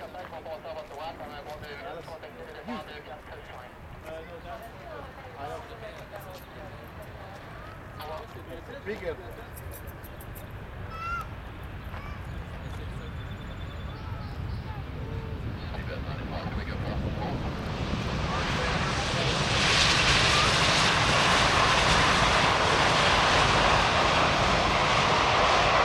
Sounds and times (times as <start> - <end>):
Speech: 0.0 - 7.4, 8.0 - 9.9, 12.0 - 17.6
Outside, urban or manmade: 0.0 - 25.8
Fixed-wing aircraft, airplane: 0.1 - 25.8.